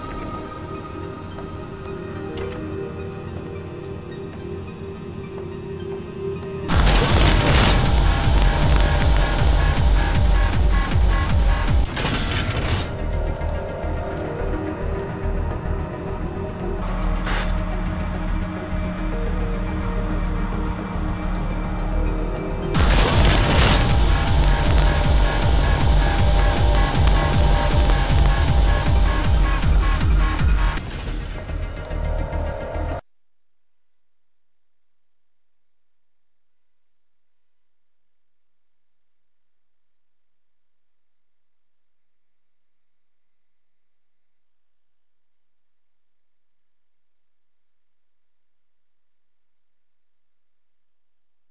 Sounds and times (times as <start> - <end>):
Music: 0.0 - 33.1.